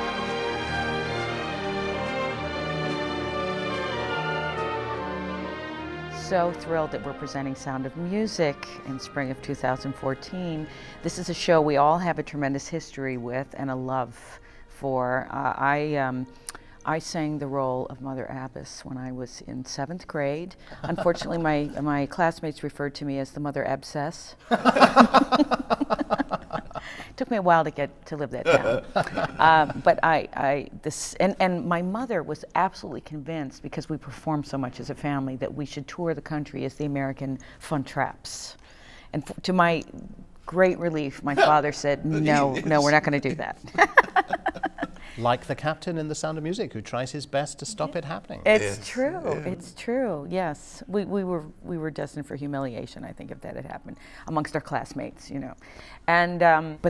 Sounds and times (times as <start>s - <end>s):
Speech: 19.0s - 22.5s, 27.3s - 32.3s, 40.5s - 43.6s, 45.2s - 55.6s.